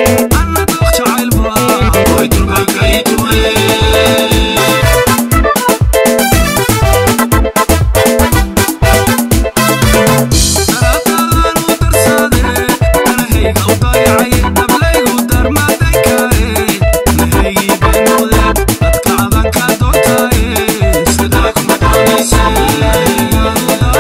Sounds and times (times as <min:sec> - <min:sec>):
Afrobeat: 0:00.0 - 0:24.0.